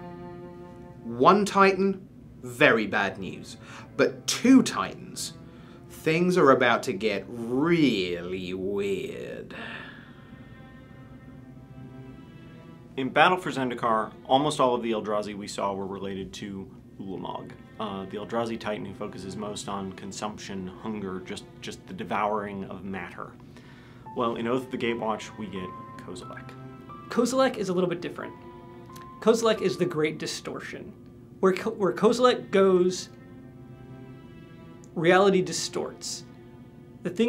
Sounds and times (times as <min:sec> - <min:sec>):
Music: 0:00.0 - 0:37.2
Speech: 0:01.0 - 0:09.6, 0:13.0 - 0:23.4, 0:24.1 - 0:28.4, 0:29.2 - 0:33.2, 0:34.9 - 0:36.3, 0:37.0 - 0:37.2.